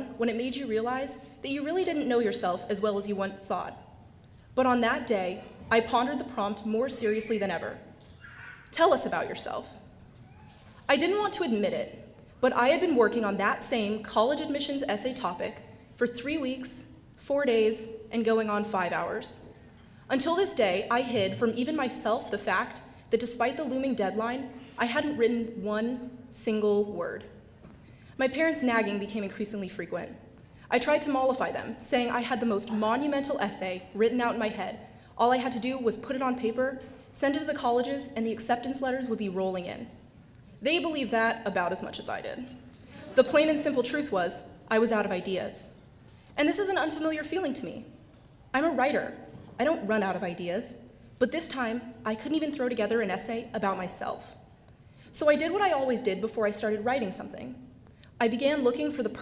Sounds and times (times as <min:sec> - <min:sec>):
Female speech, woman speaking: 0:00.0 - 0:03.8, 0:04.6 - 0:07.8, 0:08.7 - 0:09.8, 0:10.9 - 0:19.4, 0:20.1 - 0:27.3, 0:28.2 - 0:39.9, 0:40.6 - 0:45.7, 0:46.4 - 0:47.9, 0:48.6 - 0:54.4, 0:55.2 - 0:57.6, 0:58.2 - 0:59.2
Narration, monologue: 0:00.0 - 0:59.2.